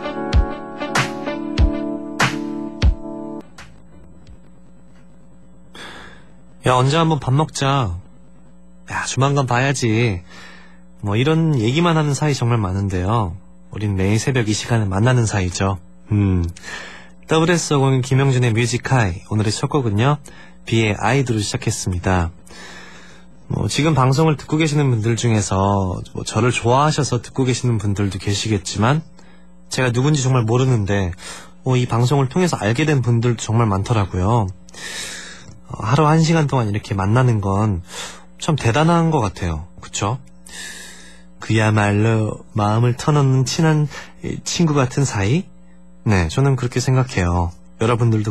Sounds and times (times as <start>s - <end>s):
Speech: 6.6s - 8.1s, 8.8s - 10.3s, 11.0s - 16.6s, 17.3s - 22.4s, 23.5s - 34.6s, 35.6s - 40.3s, 41.4s - 48.3s.